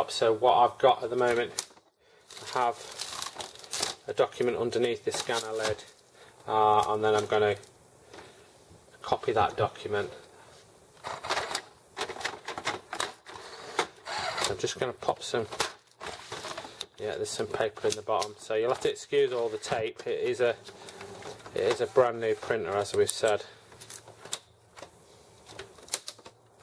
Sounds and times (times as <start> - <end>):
Speech: 0.0 - 1.6, 2.4 - 2.8, 4.0 - 7.7, 9.0 - 10.3, 14.4 - 15.6, 17.0 - 20.6, 21.5 - 23.6.